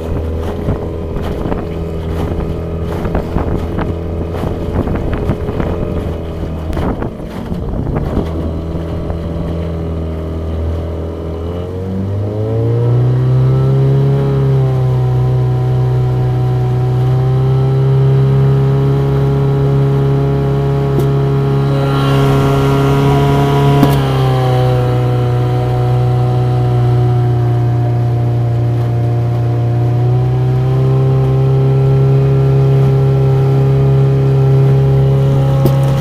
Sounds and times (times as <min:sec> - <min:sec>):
Motorboat, speedboat: 0:00.0 - 0:36.0.